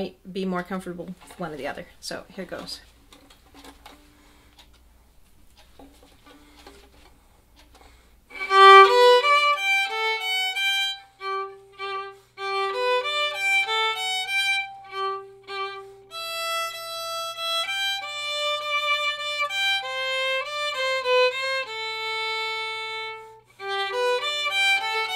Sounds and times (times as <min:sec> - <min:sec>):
Violin, fiddle: 0:08.3 - 0:25.1.